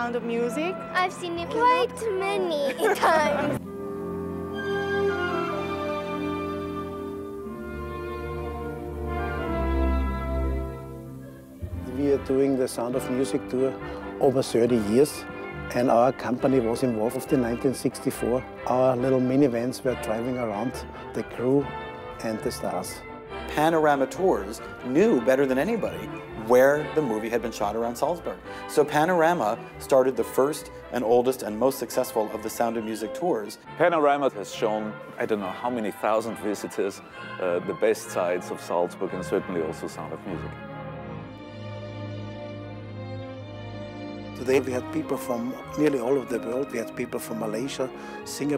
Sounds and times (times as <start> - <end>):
Music: 0.0 - 48.5.